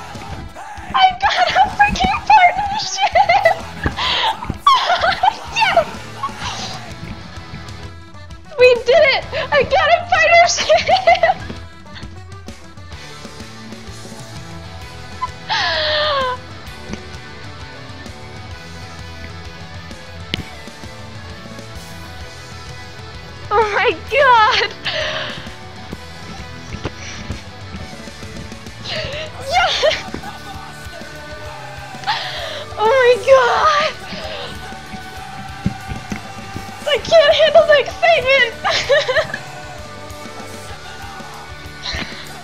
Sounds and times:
Music: 0.0 - 42.4
Speech: 1.0 - 3.2, 8.6 - 10.8, 23.5 - 24.7, 32.7 - 34.0, 36.8 - 38.6.

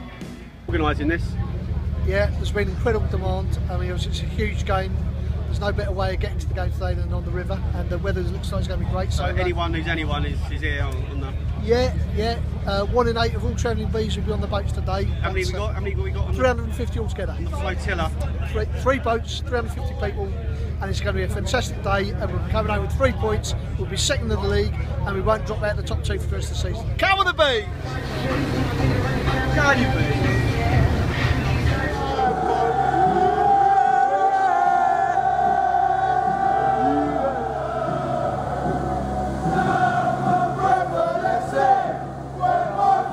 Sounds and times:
Music: 0.0 - 5.6, 23.4 - 43.1
Speech: 0.7 - 28.6.

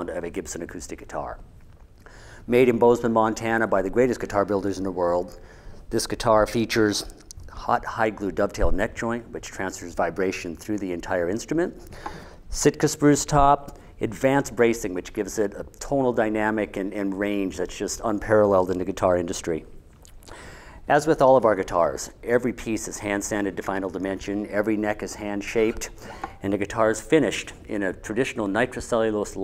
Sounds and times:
Speech: 0.0 - 1.5, 2.5 - 11.8, 12.5 - 19.8, 20.9 - 29.4.

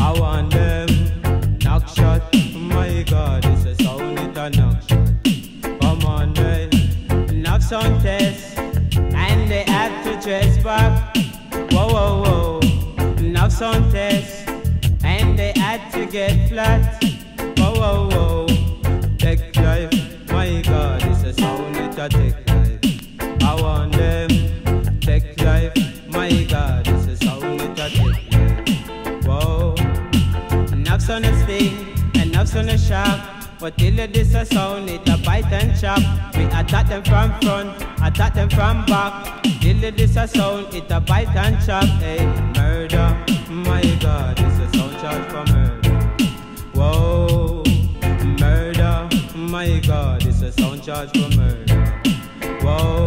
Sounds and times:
Music: 0.0 - 53.0.

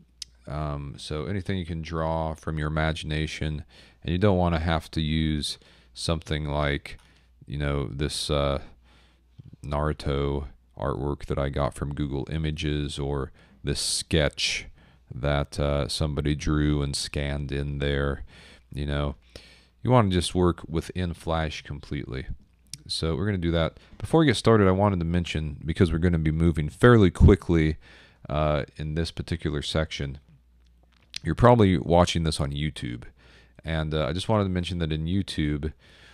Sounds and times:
Speech: 0.2 - 8.8, 9.4 - 19.2, 19.8 - 30.3, 31.2 - 35.8.

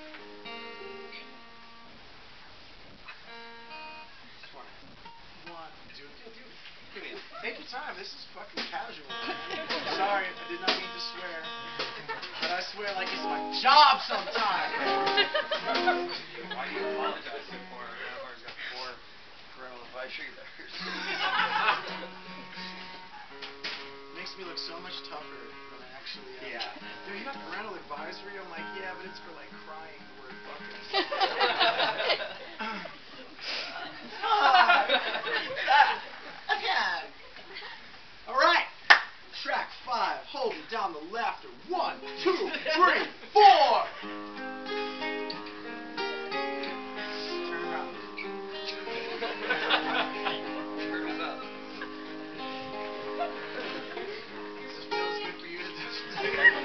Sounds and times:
Music: 0.0 - 2.0, 3.2 - 4.2, 8.6 - 18.4, 21.0 - 31.1, 41.7 - 42.7, 44.0 - 56.6
Speech: 12.4 - 14.9, 19.6 - 20.8, 24.2 - 30.6, 38.3 - 44.0
Snicker: 14.3 - 16.8, 20.8 - 22.2, 30.9 - 33.0, 33.6 - 36.6, 49.2 - 52.0, 53.1 - 54.5, 56.0 - 56.6.

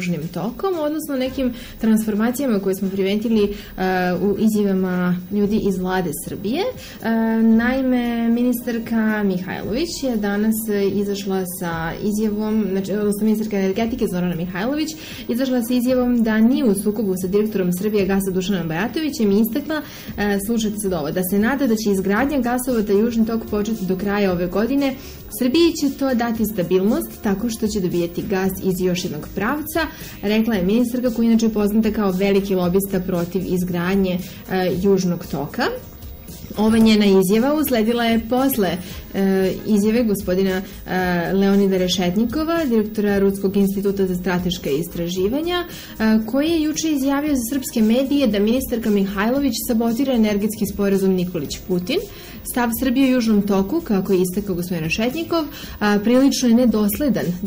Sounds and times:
Speech: 0.0 - 35.9, 36.5 - 57.4.

